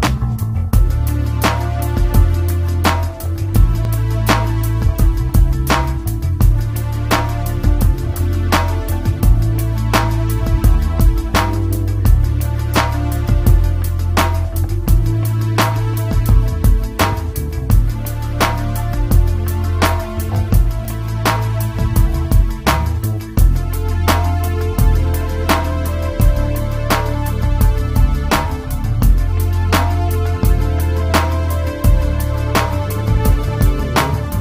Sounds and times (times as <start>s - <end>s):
Music: 0.0s - 34.4s.